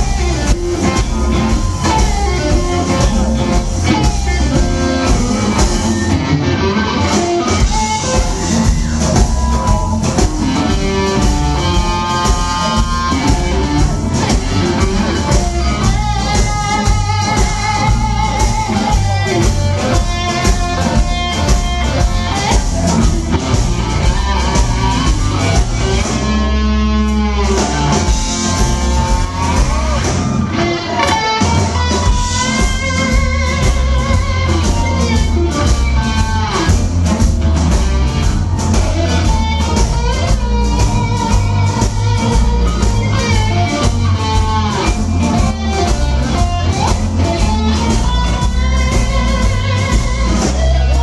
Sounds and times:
Electric guitar: 0.0 - 51.0.

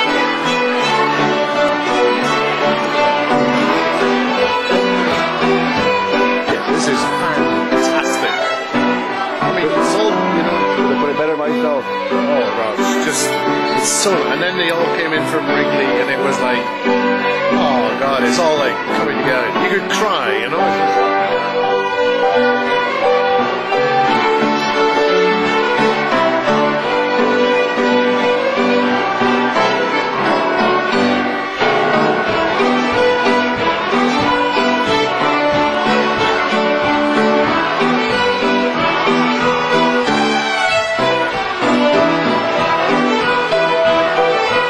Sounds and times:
Violin, fiddle: 0.0 - 44.6
Speech: 6.4 - 8.5, 9.4 - 16.7, 17.5 - 20.9.

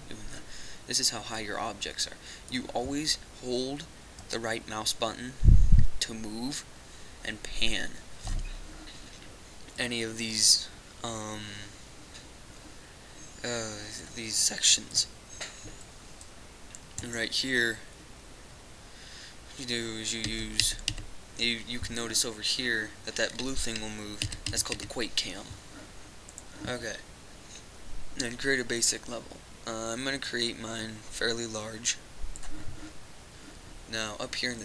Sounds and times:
Speech: 0.1 - 5.4, 6.0 - 8.0, 9.8 - 11.7, 13.4 - 15.1, 17.0 - 17.9, 19.6 - 20.8, 21.4 - 25.6, 26.6 - 27.0, 28.2 - 32.0, 33.9 - 34.6.

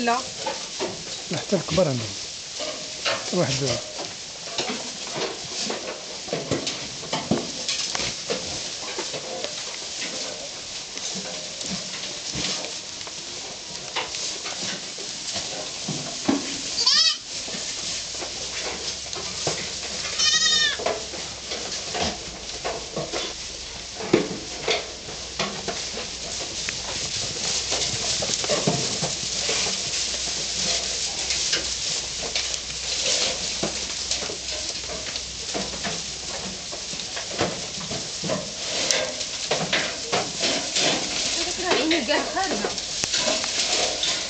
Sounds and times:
Goat: 0.0 - 44.2.

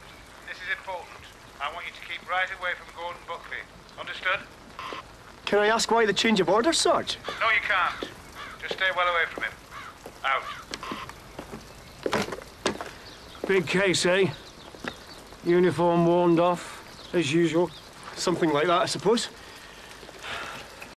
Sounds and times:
Speech: 0.5 - 4.5, 13.5 - 14.4, 15.4 - 19.4.

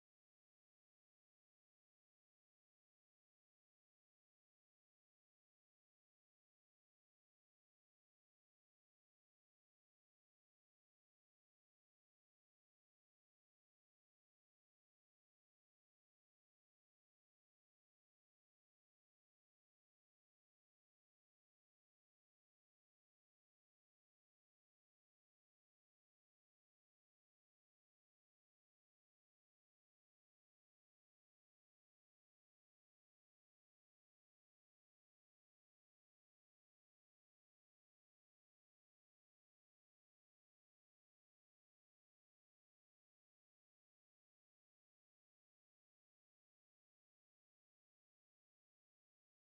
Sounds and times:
Silence: 0.0 - 49.4.

